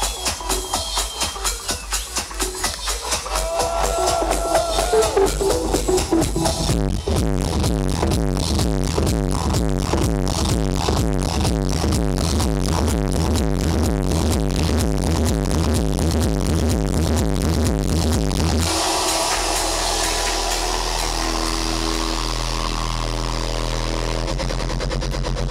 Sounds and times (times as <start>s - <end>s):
Electronic music: 0.0s - 25.5s
Outside, urban or manmade: 0.0s - 25.5s.